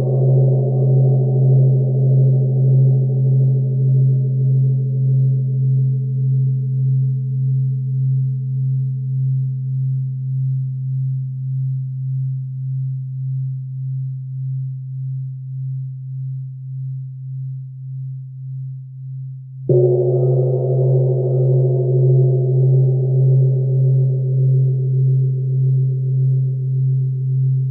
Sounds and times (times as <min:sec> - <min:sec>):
Gong: 0:00.0 - 0:09.4, 0:19.7 - 0:27.7.